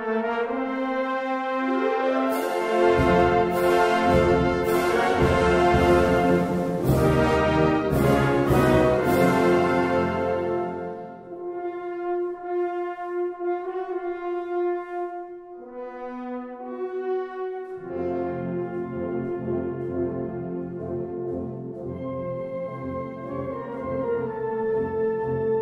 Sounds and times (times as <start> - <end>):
Trombone: 0.0 - 15.2.